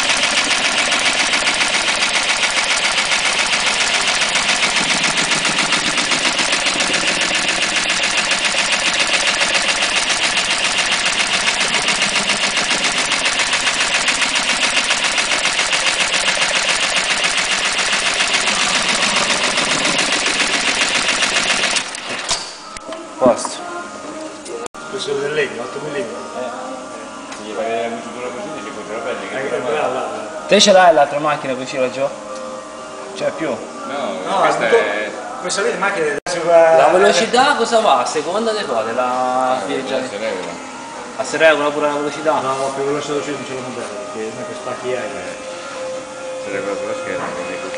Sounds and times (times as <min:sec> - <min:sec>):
Music: 0:00.0 - 0:47.7.